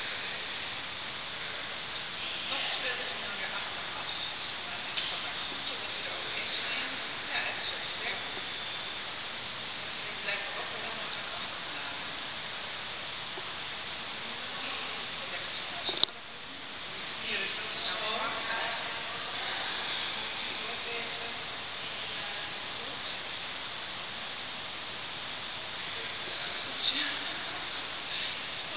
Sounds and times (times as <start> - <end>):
Speech: 2.3 - 8.5, 10.0 - 12.2, 17.0 - 23.3, 25.9 - 28.7.